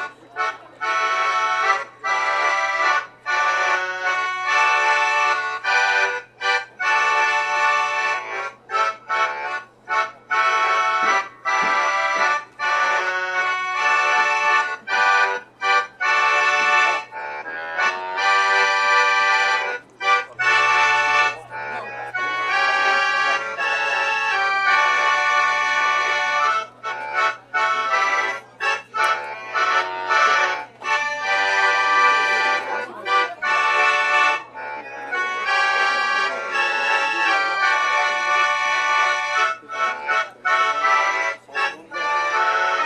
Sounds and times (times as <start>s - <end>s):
Accordion: 0.0s - 42.8s.